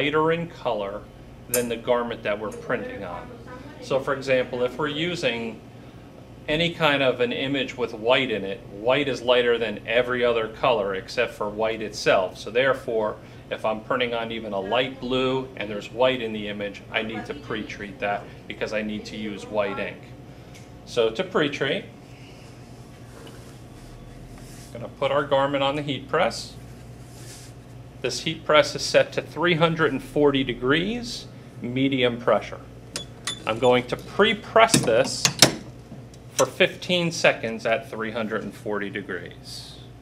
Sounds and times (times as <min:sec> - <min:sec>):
Speech: 0:00.0 - 0:05.6, 0:06.5 - 0:20.2, 0:20.9 - 0:21.9, 0:24.8 - 0:26.6, 0:28.0 - 0:32.7, 0:33.5 - 0:35.4, 0:36.4 - 0:39.9.